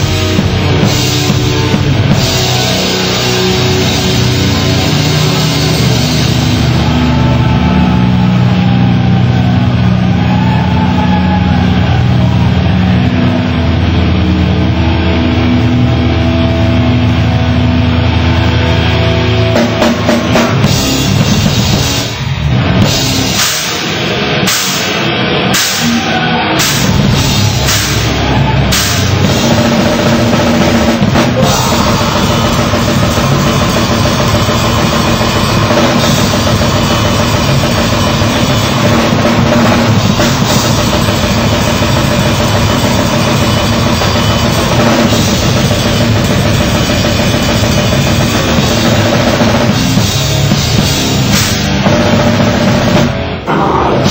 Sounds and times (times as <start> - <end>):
Music: 0.0 - 54.1.